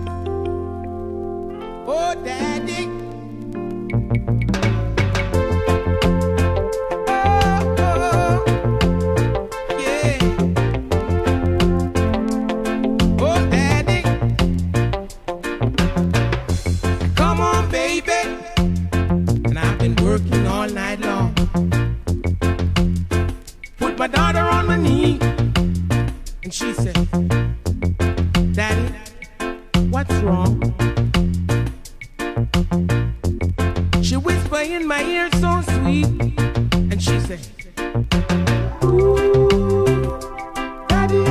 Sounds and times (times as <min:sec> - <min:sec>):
Funny music: 0:00.0 - 0:41.3.